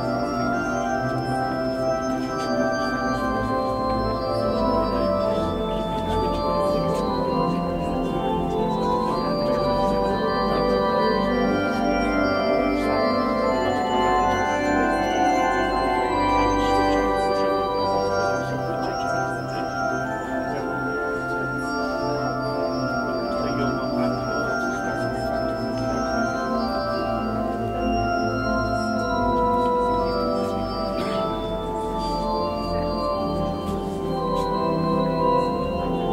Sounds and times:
Keyboard (musical): 0:00.0 - 0:36.1.

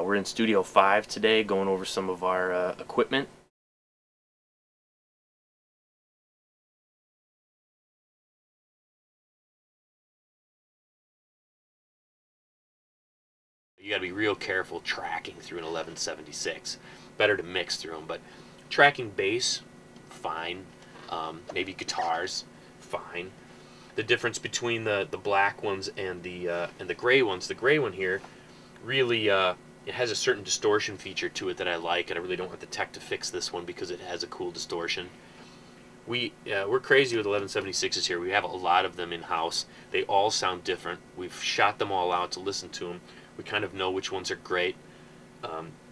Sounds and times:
Speech: 0:00.0 - 0:03.4, 0:13.8 - 0:23.4, 0:24.0 - 0:28.2, 0:28.8 - 0:35.1, 0:36.1 - 0:44.8, 0:45.4 - 0:45.8.

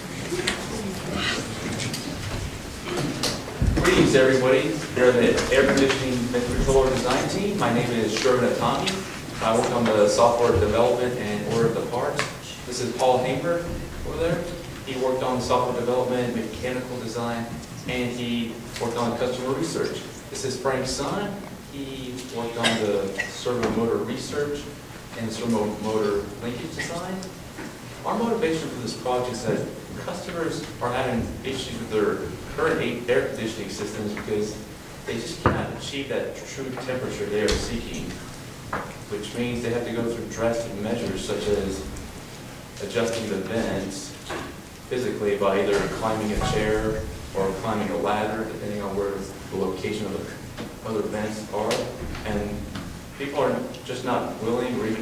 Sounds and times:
Speech: 0:02.9 - 0:27.4, 0:28.0 - 0:38.3, 0:39.1 - 0:42.0, 0:42.8 - 0:55.0.

